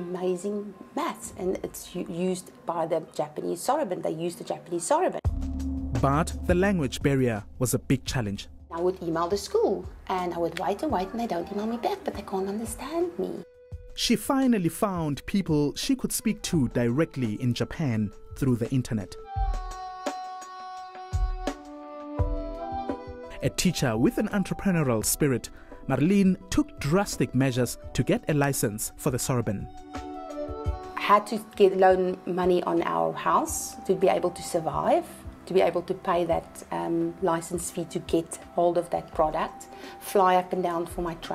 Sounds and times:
Female speech, woman speaking: 0:00.0 - 0:05.3, 0:08.7 - 0:13.4, 0:31.0 - 0:41.3.

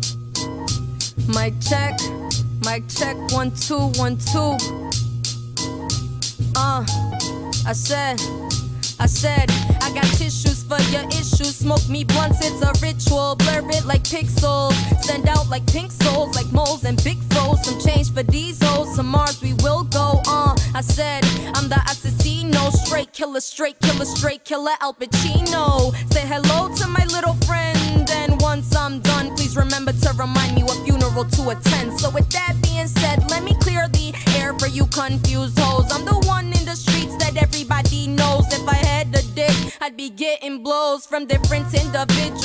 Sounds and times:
Music: 0:00.0 - 0:42.4.

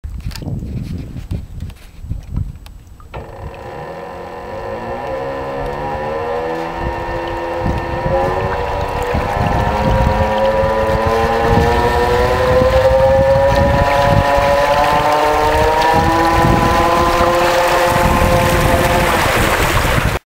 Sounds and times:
Motorboat, speedboat: 0:03.0 - 0:20.2.

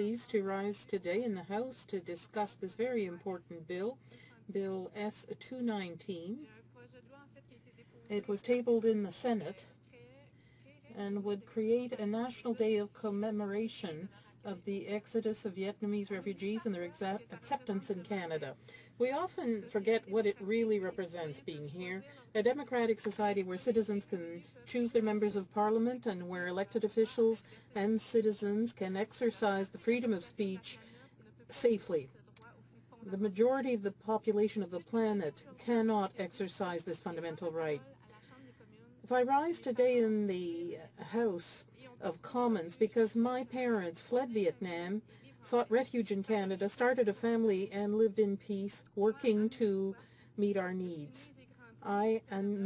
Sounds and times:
Female speech, woman speaking: 0:00.0 - 0:52.6
Narration, monologue: 0:00.0 - 0:52.6.

